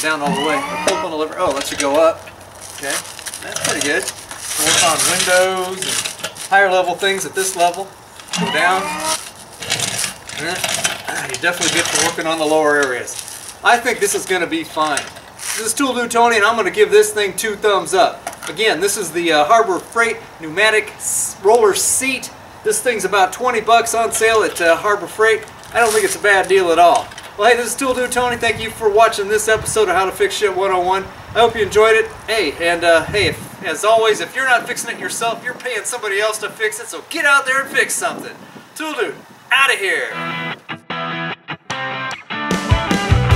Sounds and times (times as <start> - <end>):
Speech: 0.0 - 2.2, 2.8 - 9.2, 10.4 - 40.2
Outside, urban or manmade: 0.0 - 43.3.